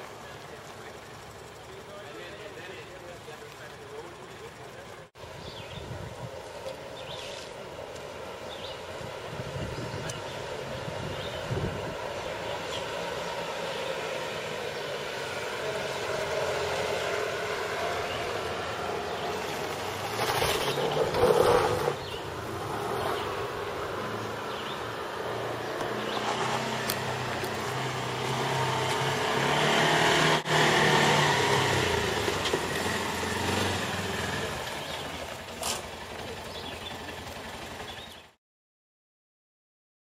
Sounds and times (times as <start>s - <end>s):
Outside, rural or natural: 0.0s - 38.4s
Vehicle: 0.0s - 38.4s.